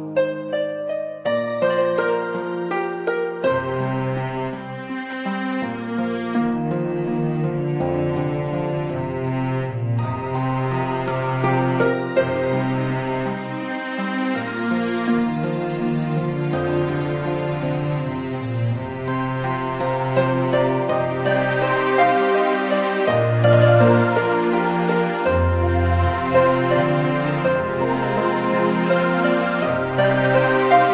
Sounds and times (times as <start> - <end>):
Soundtrack music: 3.6 - 30.9.